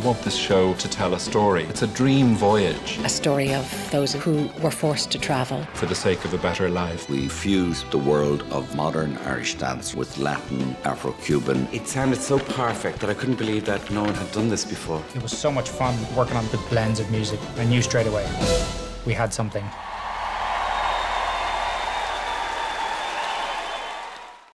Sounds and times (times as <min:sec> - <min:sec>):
Speech: 0:00.0 - 0:18.3, 0:19.0 - 0:19.7
Music: 0:00.0 - 0:24.4.